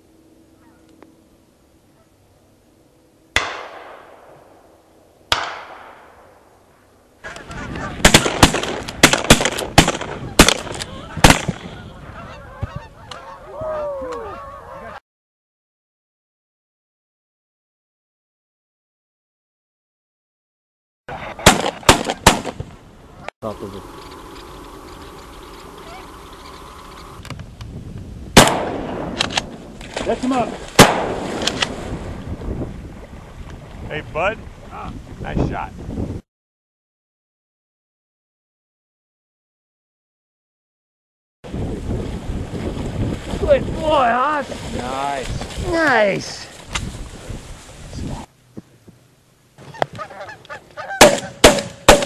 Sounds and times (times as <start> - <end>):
Honk: 7.2 - 8.0, 10.9 - 15.0, 25.8 - 26.6, 49.6 - 51.4.